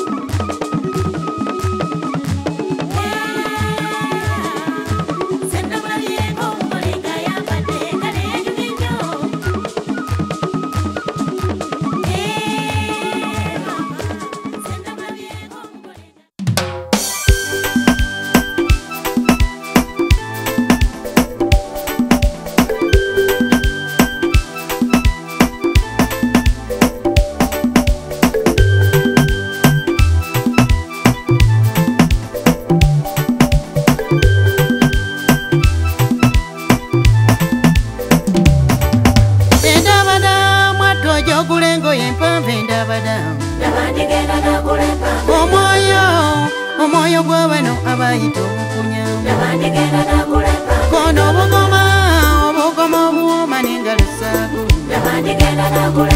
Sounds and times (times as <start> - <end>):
Music: 0.0 - 56.1.